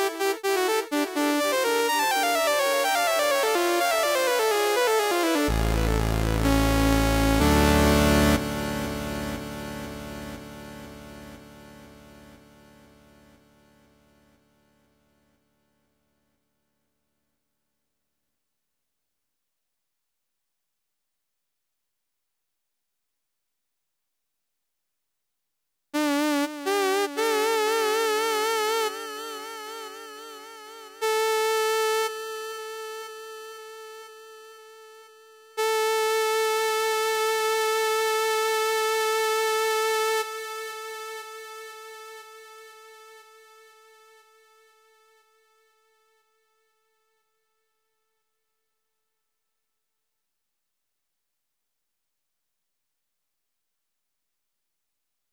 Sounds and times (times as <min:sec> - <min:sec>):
Music: 0:00.0 - 0:17.4, 0:26.0 - 0:49.1.